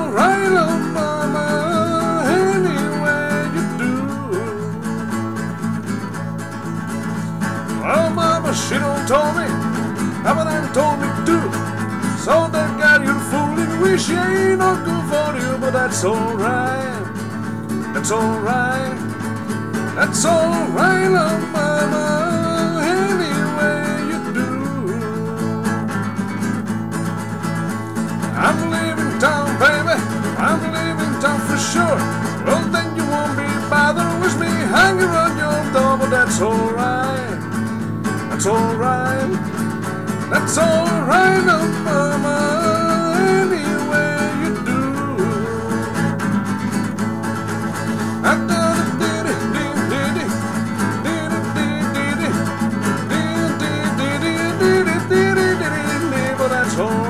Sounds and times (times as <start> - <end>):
Acoustic guitar: 0.0 - 57.0.